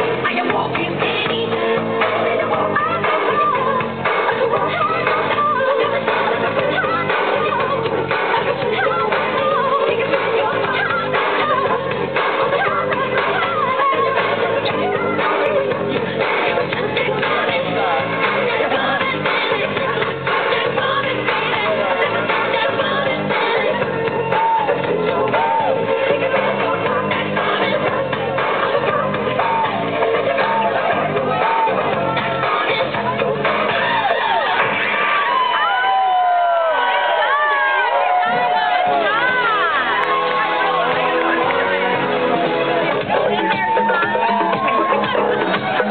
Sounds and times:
Crowd: 0.0 - 45.9
Music: 0.0 - 45.9.

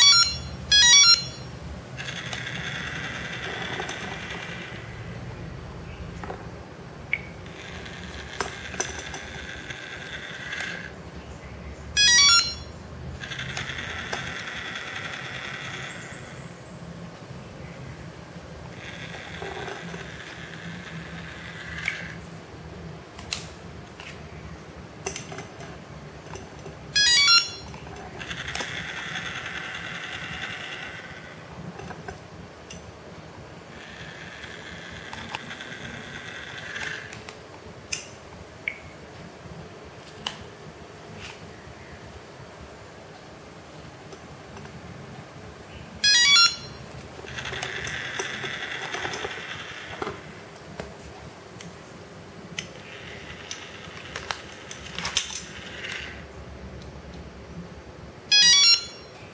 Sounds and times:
Telephone: 0.0 - 5.2, 7.4 - 11.0, 12.0 - 16.4, 18.7 - 22.2, 26.9 - 32.2, 33.7 - 37.2, 46.0 - 50.4, 52.7 - 56.2, 58.3 - 59.3.

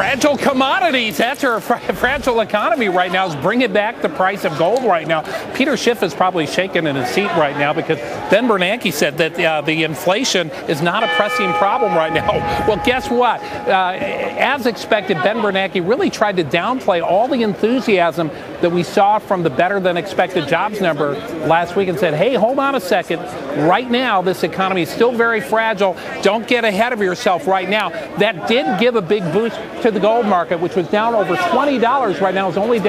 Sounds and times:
Speech: 0.0 - 32.8.

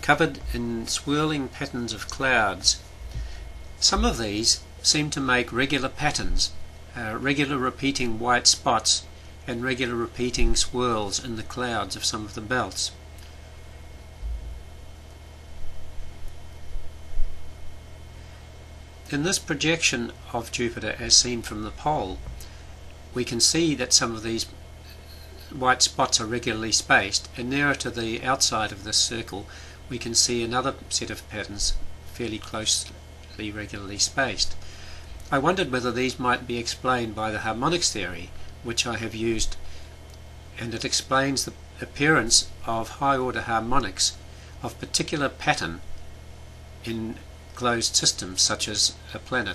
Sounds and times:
Speech: 0.0 - 2.8, 3.8 - 13.0, 19.1 - 22.3, 23.2 - 24.6, 25.4 - 34.6, 35.3 - 39.6, 40.6 - 45.8, 46.8 - 49.5.

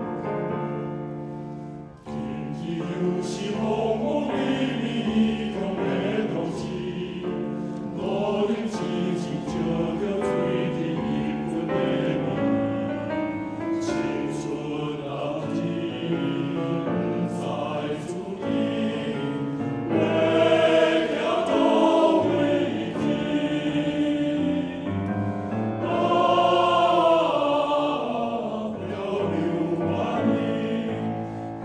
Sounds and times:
Music: 0.0 - 31.6.

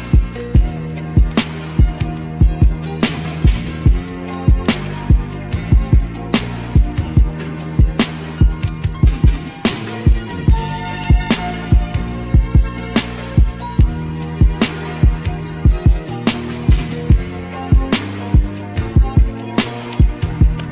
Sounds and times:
Music: 0.0 - 20.7.

